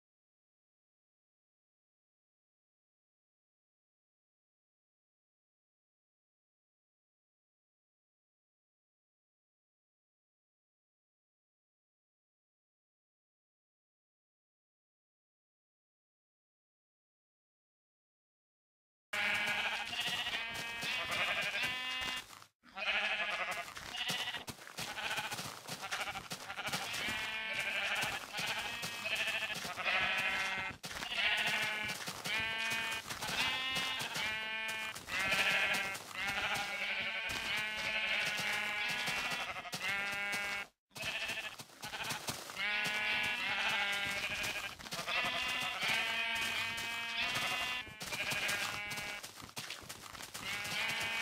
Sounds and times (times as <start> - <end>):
Bleat: 19.2 - 49.3, 50.3 - 51.2.